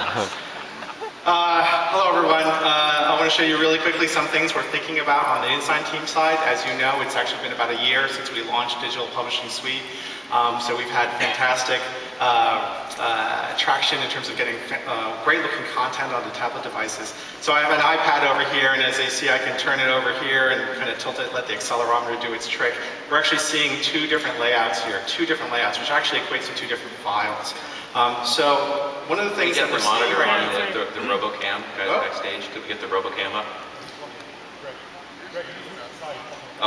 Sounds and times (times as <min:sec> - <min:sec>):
Speech: 0:01.3 - 0:36.6.